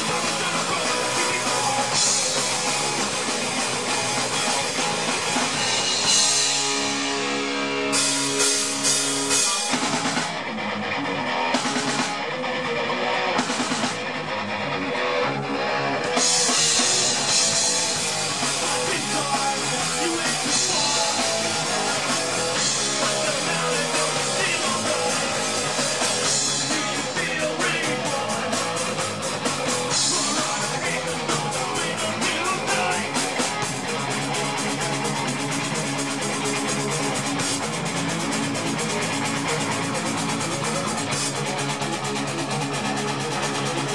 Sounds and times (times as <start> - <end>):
Drum: 0.0 - 10.5, 11.4 - 12.4, 13.4 - 14.2, 16.1 - 43.9
Drum kit: 0.0 - 14.4, 15.1 - 43.9
Guitar: 0.0 - 43.9
Punk rock: 0.0 - 43.9.